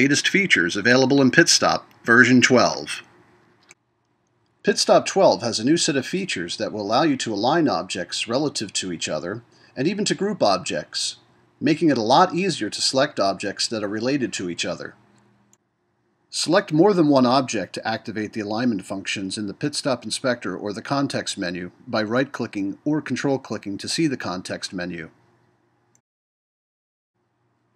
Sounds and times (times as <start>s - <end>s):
Speech: 0.0s - 3.0s, 4.7s - 15.0s, 16.3s - 25.1s.